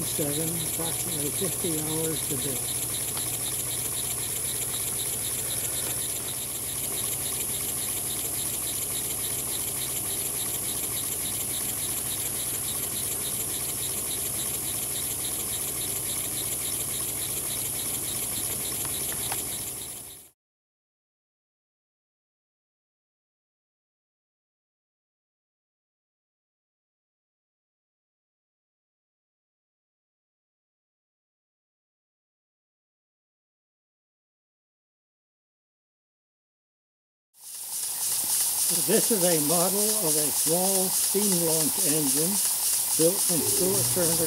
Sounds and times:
Engine: 0.0 - 20.4, 37.4 - 44.2.

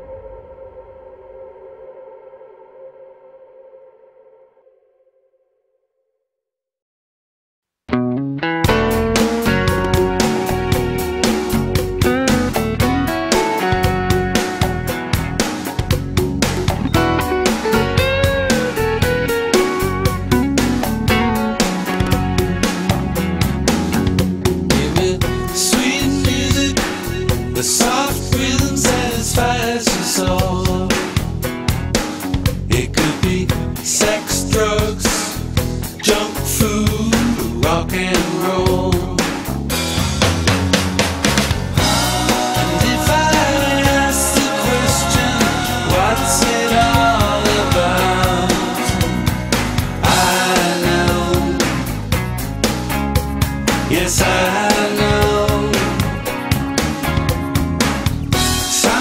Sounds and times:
Music: 0.0 - 5.9, 7.7 - 59.0.

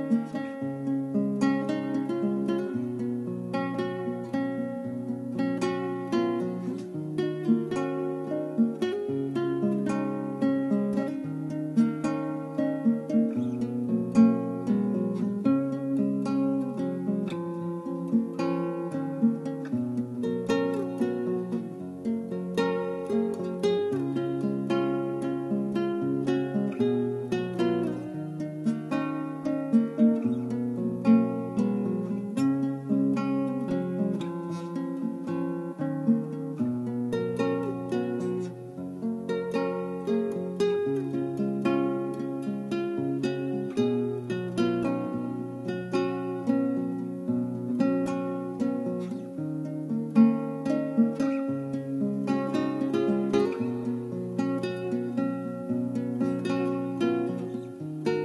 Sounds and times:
Acoustic guitar: 0.0 - 58.2
Strum: 0.0 - 58.2.

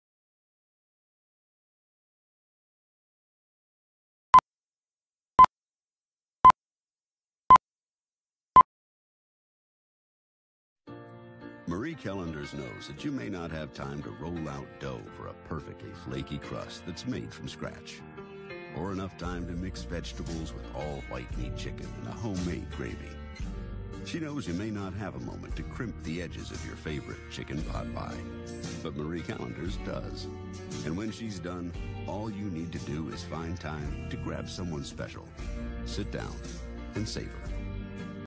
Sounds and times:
Music: 10.9 - 38.2
Speech: 11.7 - 18.0, 18.8 - 23.2, 24.1 - 37.5.

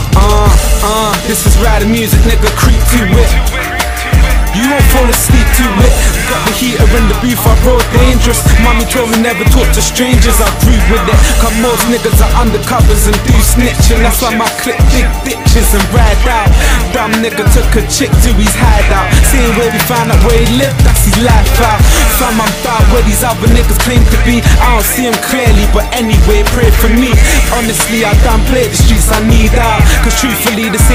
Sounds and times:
Background music: 0.0 - 30.9
Dance music: 0.0 - 30.9
Rhythm and blues: 0.0 - 30.9.

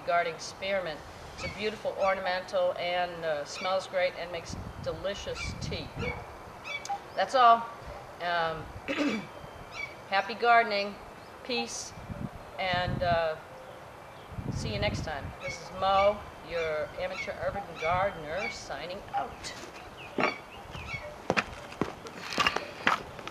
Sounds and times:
Outside, rural or natural: 0.0 - 23.3
Speech: 7.2 - 8.7, 10.1 - 12.0, 12.6 - 13.4, 14.6 - 19.6.

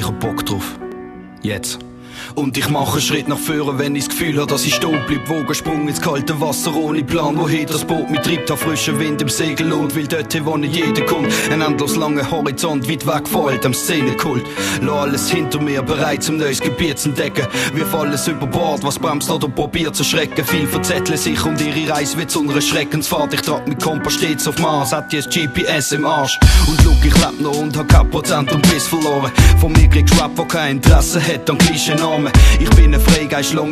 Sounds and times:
Music: 0.0 - 33.7.

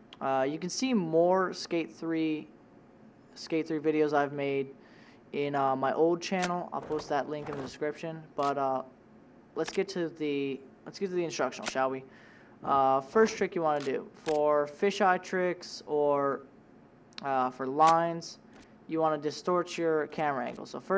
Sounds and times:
Speech: 0.2 - 2.5, 3.4 - 4.8, 5.4 - 8.9, 9.6 - 16.5, 17.2 - 20.9
Single-lens reflex camera: 6.4 - 7.8, 9.6 - 9.8, 13.8 - 14.4.

